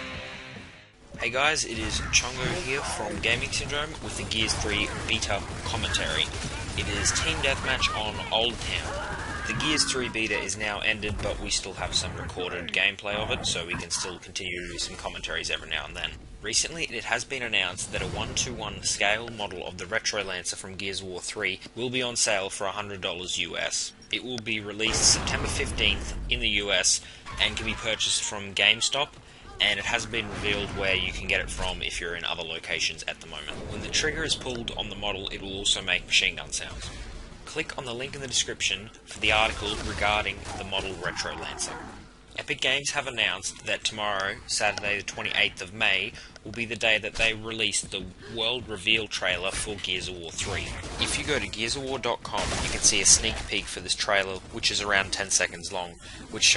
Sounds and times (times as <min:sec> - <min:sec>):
Speech: 0:01.2 - 0:56.5.